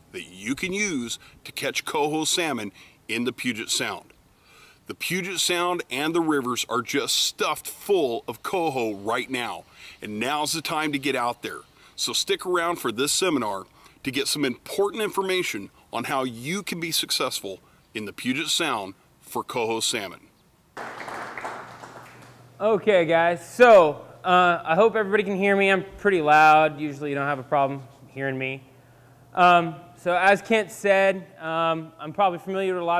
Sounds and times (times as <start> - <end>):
Speech: 0.2 - 4.1, 4.9 - 20.3, 22.6 - 28.7, 29.4 - 32.9.